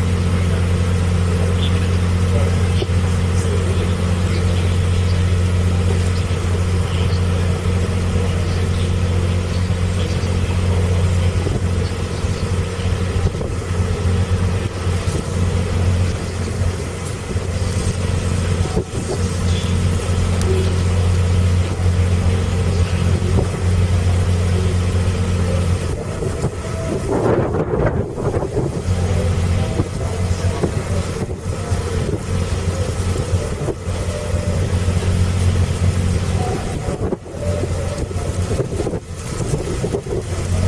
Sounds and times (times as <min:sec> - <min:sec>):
Motorboat, speedboat: 0:00.0 - 0:40.6.